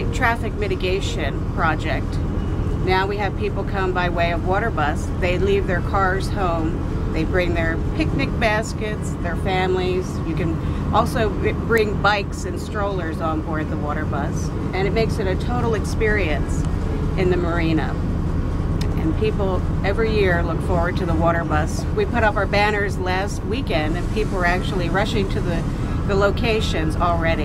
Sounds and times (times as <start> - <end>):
Speech: 0.0 - 2.2, 2.8 - 16.6, 17.2 - 18.0, 18.8 - 27.4
Vehicle: 0.0 - 27.4.